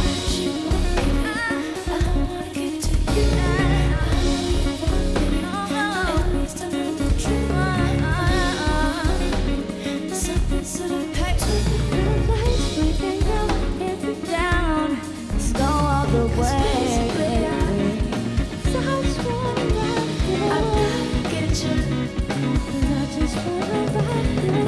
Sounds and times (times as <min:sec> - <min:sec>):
Music: 0:00.0 - 0:24.6
Singing: 0:00.0 - 0:24.6.